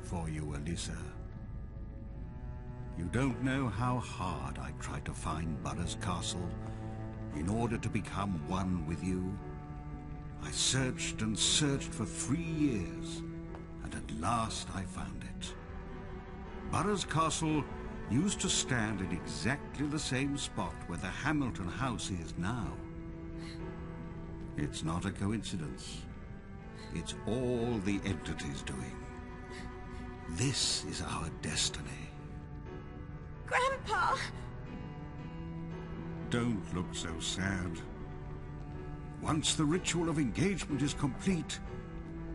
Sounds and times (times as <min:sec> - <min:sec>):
Speech: 0:00.0 - 0:01.2, 0:03.0 - 0:06.6, 0:07.3 - 0:09.4, 0:10.4 - 0:13.2, 0:13.8 - 0:15.5, 0:16.7 - 0:22.8, 0:24.6 - 0:26.0, 0:27.0 - 0:29.0, 0:30.3 - 0:32.1, 0:33.5 - 0:34.3, 0:36.3 - 0:37.9, 0:39.2 - 0:41.6
Music: 0:00.0 - 0:42.3.